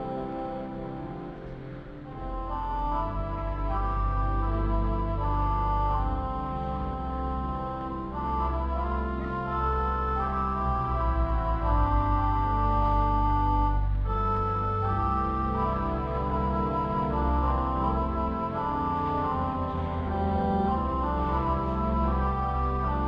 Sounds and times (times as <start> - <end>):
Keyboard (musical): 0.0 - 23.0.